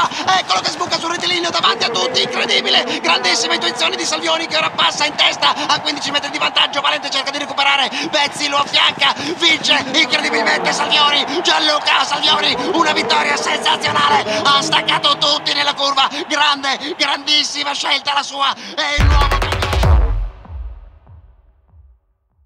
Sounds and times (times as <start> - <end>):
Speech: 0.0 - 19.7.